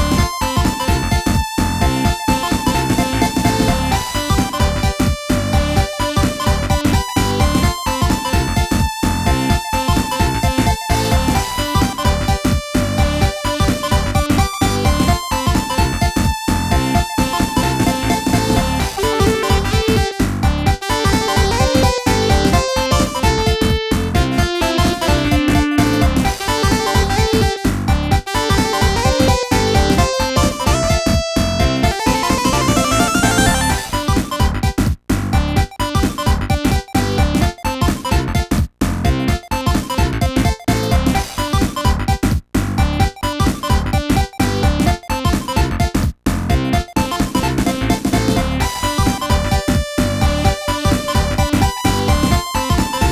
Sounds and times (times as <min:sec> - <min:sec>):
Music: 0:00.0 - 0:53.1.